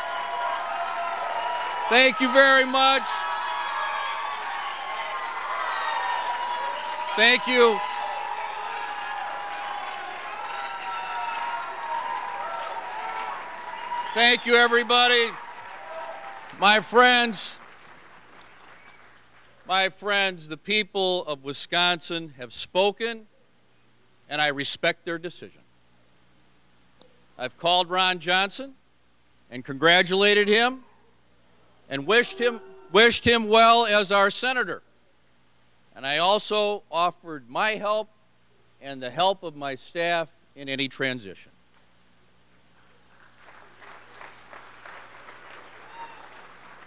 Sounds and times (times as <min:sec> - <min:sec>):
Male speech, man speaking: 0:01.9 - 0:03.2, 0:07.2 - 0:07.8, 0:14.2 - 0:15.4, 0:16.6 - 0:17.6, 0:19.7 - 0:23.3, 0:24.3 - 0:25.6, 0:27.4 - 0:28.8, 0:29.6 - 0:30.8, 0:31.9 - 0:34.8, 0:36.0 - 0:38.1, 0:38.8 - 0:41.5
Narration, monologue: 0:14.2 - 0:15.4, 0:16.5 - 0:17.7, 0:19.6 - 0:42.2.